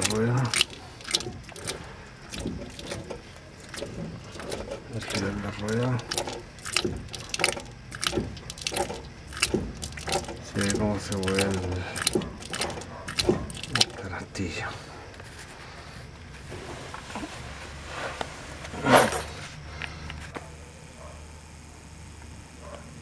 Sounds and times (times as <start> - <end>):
Gears: 0.0 - 14.1.